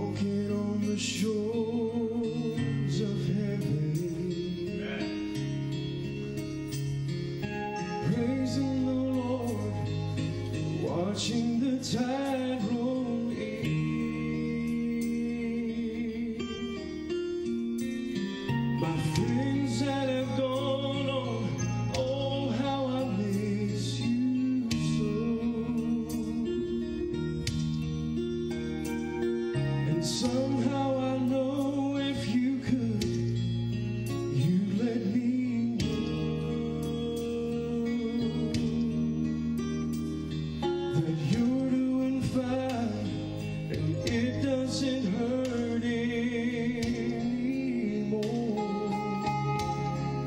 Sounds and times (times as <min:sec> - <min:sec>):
Music: 0:00.0 - 0:50.2.